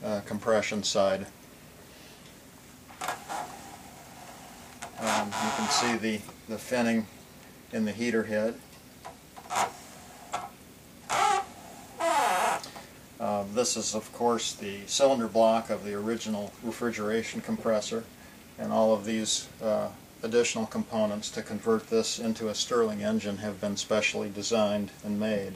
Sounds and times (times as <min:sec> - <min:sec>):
Speech: 0:00.0 - 0:01.4, 0:05.0 - 0:07.1, 0:07.7 - 0:08.6, 0:13.2 - 0:25.5.